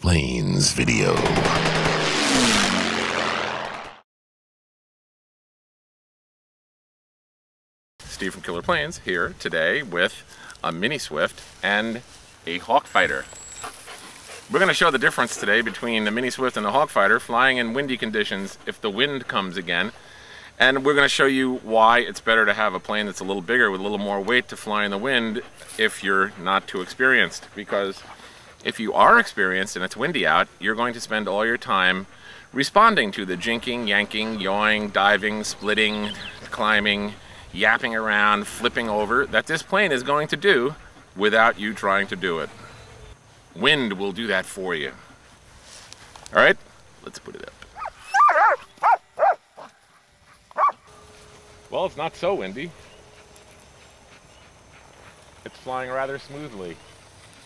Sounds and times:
Speech: 0:00.0 - 0:01.4, 0:08.1 - 0:13.3, 0:14.5 - 0:20.0, 0:20.6 - 0:28.0, 0:28.6 - 0:42.5, 0:43.6 - 0:45.0, 0:46.3 - 0:47.6, 0:51.7 - 0:52.8, 0:55.4 - 0:56.8.

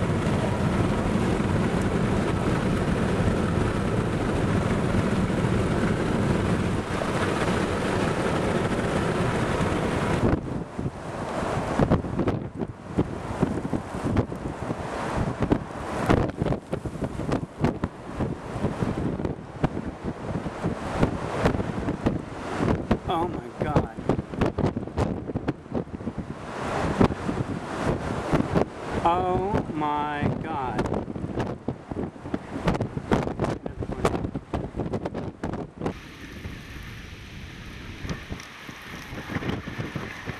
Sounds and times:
Thunderstorm: 0:00.0 - 0:23.1, 0:30.8 - 0:40.3
Vehicle: 0:00.0 - 0:40.3.

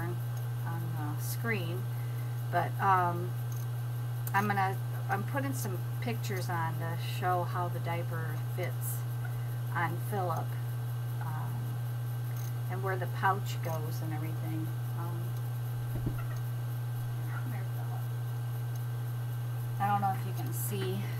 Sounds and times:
Speech: 0:00.0 - 0:01.9, 0:02.5 - 0:03.3, 0:04.3 - 0:09.1, 0:09.8 - 0:10.6, 0:11.2 - 0:11.7, 0:12.7 - 0:15.3, 0:17.2 - 0:18.1, 0:19.8 - 0:21.1.

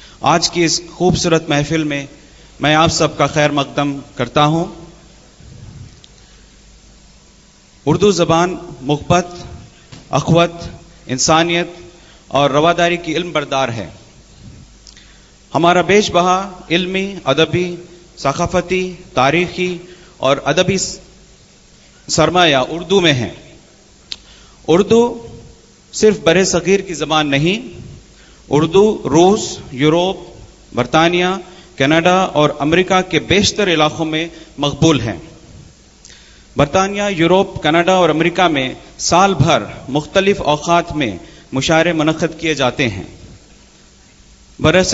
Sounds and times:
Narration, monologue: 0:00.0 - 0:44.9
Male speech, man speaking: 0:00.3 - 0:04.9, 0:07.9 - 0:14.0, 0:15.6 - 0:21.0, 0:22.1 - 0:23.5, 0:24.7 - 0:25.4, 0:26.0 - 0:27.8, 0:28.5 - 0:35.3, 0:36.6 - 0:43.2, 0:44.6 - 0:44.9.

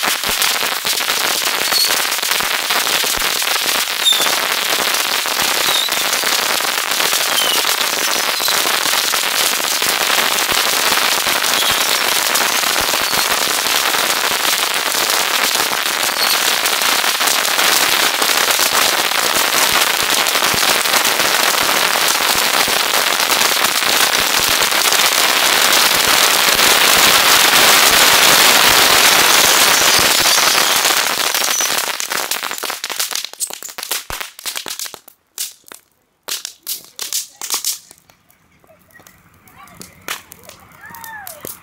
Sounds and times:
Crackle: 0:00.0 - 0:41.6
Fireworks: 0:00.0 - 0:41.6.

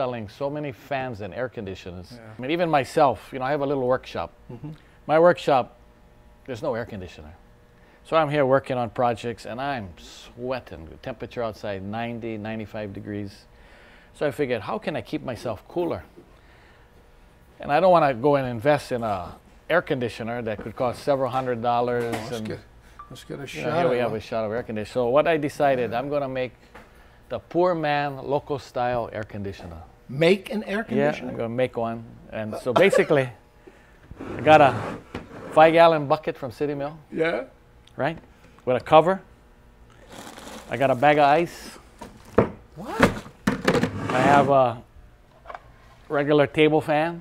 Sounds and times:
Speech: 0:17.6 - 0:26.6, 0:27.3 - 0:33.4, 0:44.1 - 0:44.8, 0:46.1 - 0:47.2.

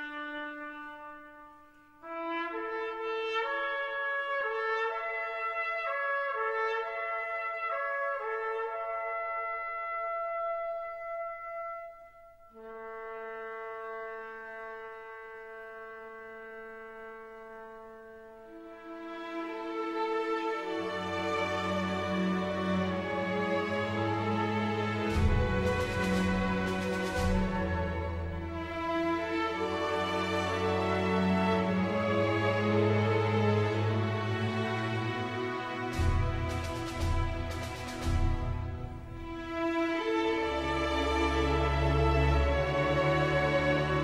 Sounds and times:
Music: 0:00.0 - 0:44.0.

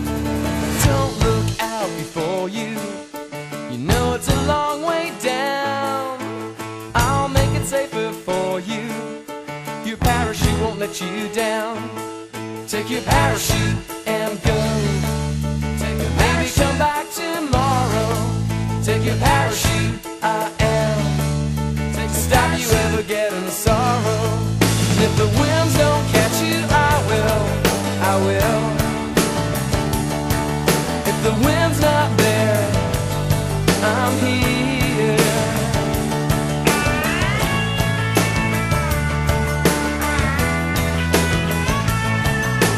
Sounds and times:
Music: 0:00.0 - 0:42.7.

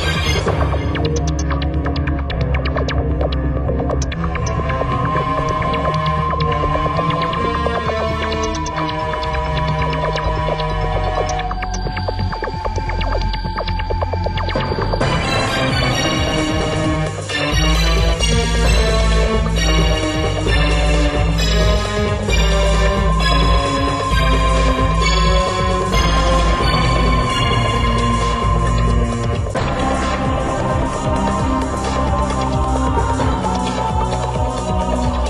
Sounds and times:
Soundtrack music: 0:00.0 - 0:35.3.

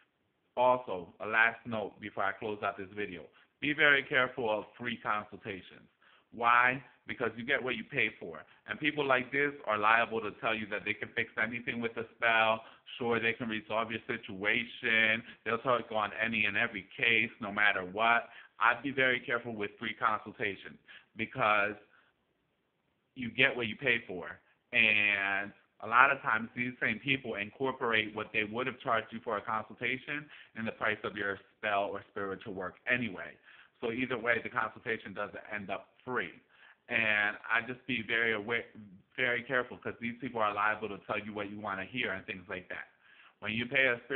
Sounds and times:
Inside, small room: 0:00.0 - 0:44.1
Speech: 0:00.6 - 0:21.9, 0:23.2 - 0:44.1.

